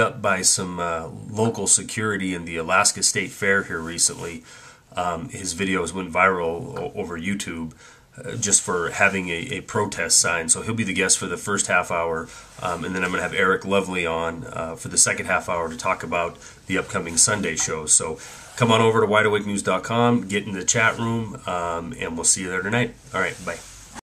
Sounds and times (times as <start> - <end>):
Speech: 0.0 - 24.0.